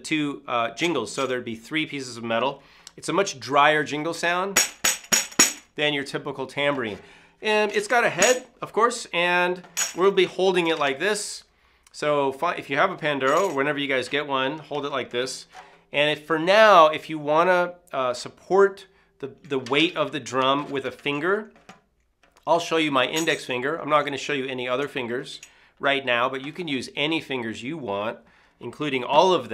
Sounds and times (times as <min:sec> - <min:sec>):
Speech: 0:00.0 - 0:04.6, 0:05.8 - 0:21.5, 0:22.4 - 0:29.5.